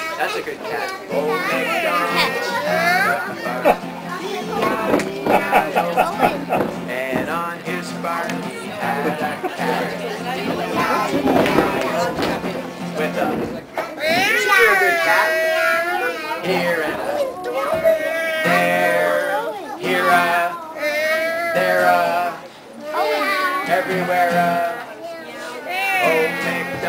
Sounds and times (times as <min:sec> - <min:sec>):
Male singing: 0:00.2 - 0:13.6, 0:14.2 - 0:20.8, 0:21.4 - 0:22.5, 0:23.5 - 0:24.9, 0:25.8 - 0:26.8.